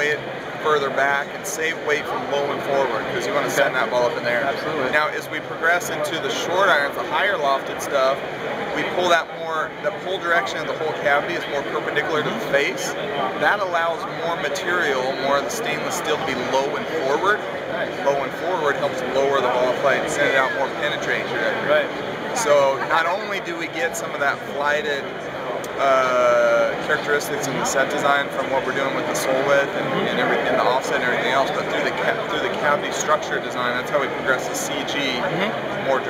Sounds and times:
Speech: 0.0s - 8.2s, 8.8s - 25.1s, 25.7s - 36.1s.

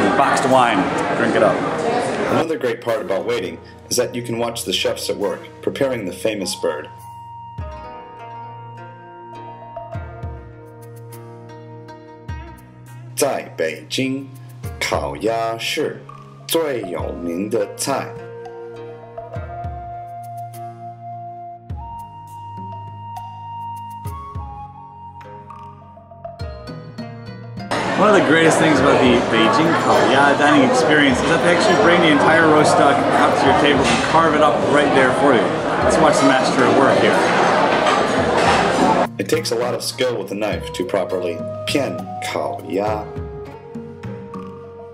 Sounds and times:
Music: 0.0s - 44.9s
Speech: 2.3s - 6.9s, 13.2s - 18.2s, 27.9s - 37.4s, 39.0s - 43.1s.

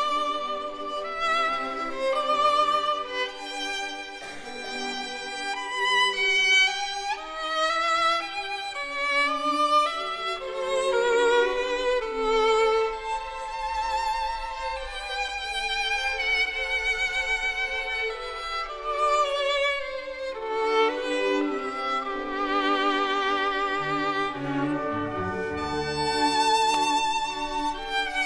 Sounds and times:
Violin, fiddle: 0.0s - 28.2s.

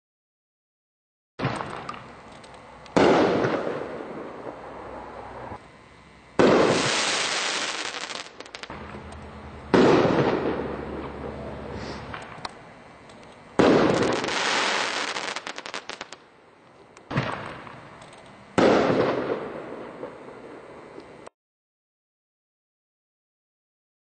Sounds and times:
Fireworks: 1.4s - 2.2s, 2.9s - 5.6s, 6.4s - 12.6s, 13.6s - 16.3s, 17.1s - 18.0s, 18.6s - 21.3s.

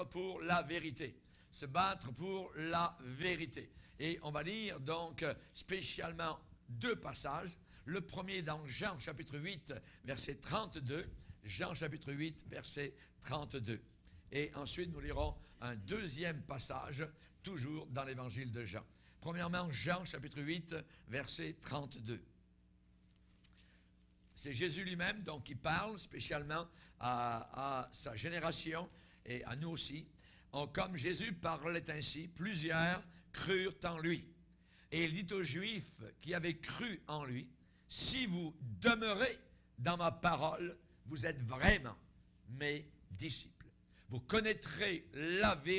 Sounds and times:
Speech: 0.0s - 22.3s, 24.4s - 45.7s.

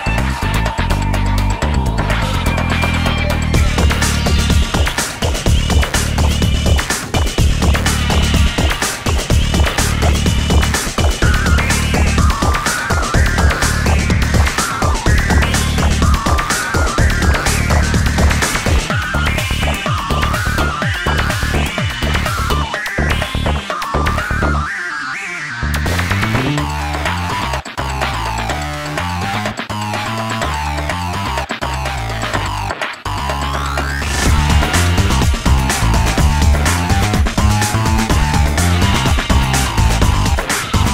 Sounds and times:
Funk: 0.0s - 24.8s, 25.5s - 40.9s.

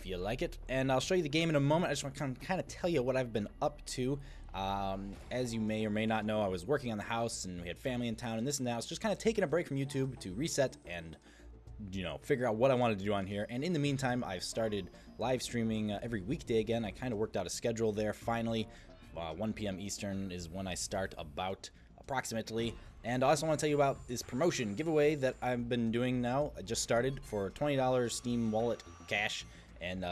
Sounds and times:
Speech: 0.0s - 11.2s, 11.8s - 30.1s
Music: 0.0s - 30.1s.

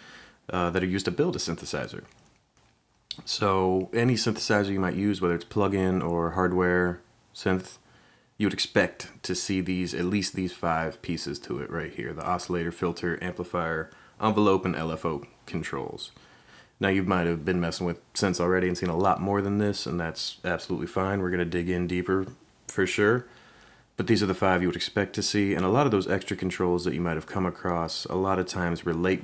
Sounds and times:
Speech: 0.5s - 2.2s, 3.1s - 16.2s, 16.8s - 23.3s, 24.0s - 29.2s.

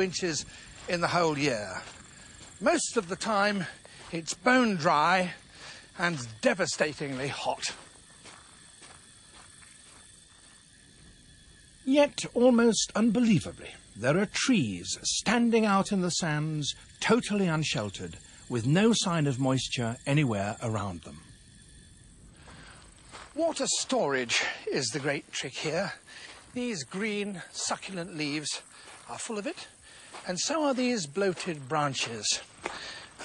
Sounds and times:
Speech: 0.0s - 1.8s, 2.6s - 5.4s, 6.0s - 7.8s, 11.9s - 21.2s, 23.4s - 26.0s, 26.6s - 32.4s.

